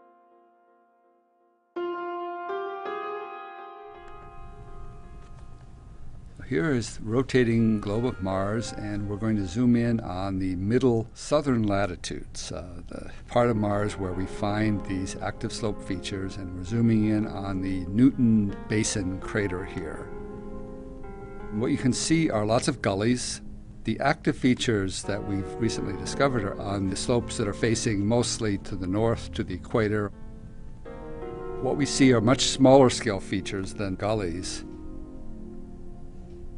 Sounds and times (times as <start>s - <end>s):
Music: 0.0s - 36.5s
Speech: 6.4s - 20.1s, 21.5s - 30.2s, 31.6s - 34.7s.